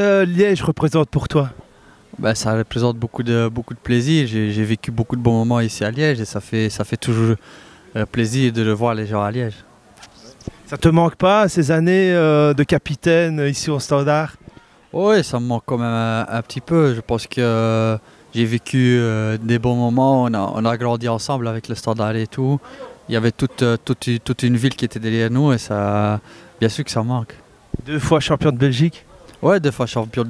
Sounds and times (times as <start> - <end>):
Speech: 0.0 - 1.6, 2.2 - 30.2.